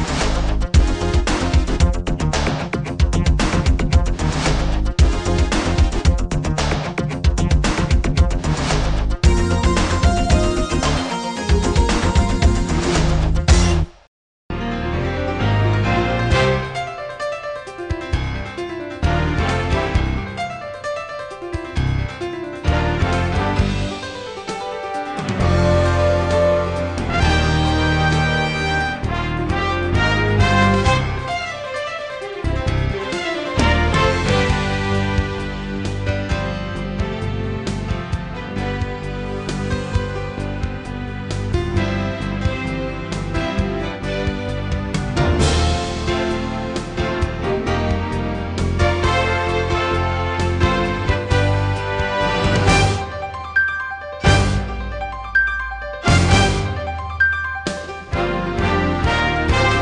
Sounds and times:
Music: 0.0s - 59.8s.

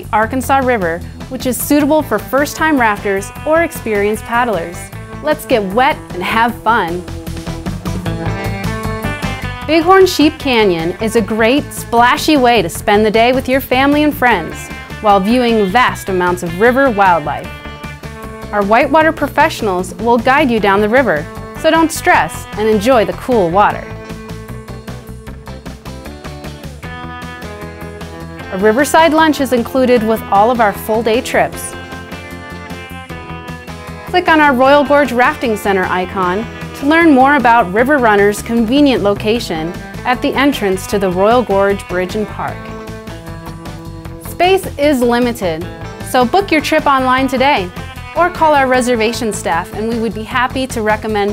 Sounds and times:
Speech: 0.0s - 7.0s, 9.7s - 17.5s, 18.5s - 23.9s, 28.6s - 31.8s, 34.1s - 42.6s, 44.3s - 51.3s
Music: 0.0s - 51.3s.

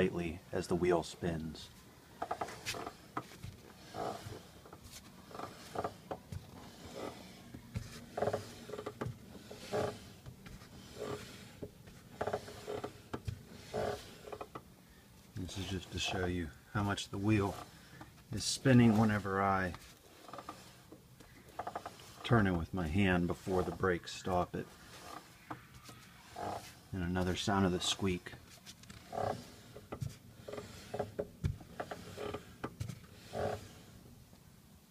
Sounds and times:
Ratchet, pawl: 3.7s - 14.6s, 15.5s - 25.6s, 26.2s - 28.1s, 28.8s - 34.0s.

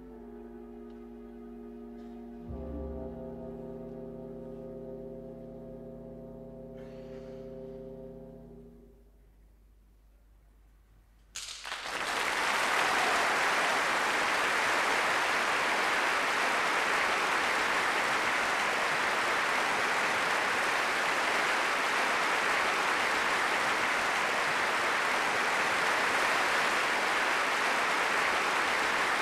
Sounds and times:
Orchestra: 0.0s - 9.1s, 11.4s - 29.2s.

